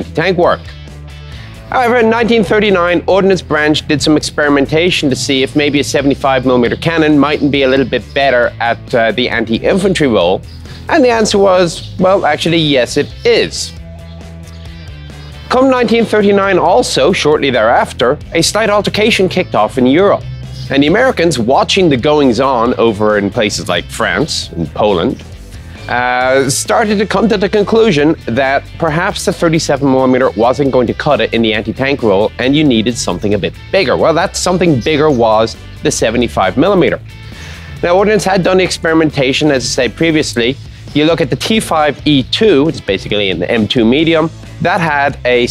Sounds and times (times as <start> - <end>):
Speech: 0.0 - 0.7, 1.7 - 13.8, 15.5 - 25.2, 25.9 - 37.0, 37.8 - 45.5
Music: 0.0 - 45.5.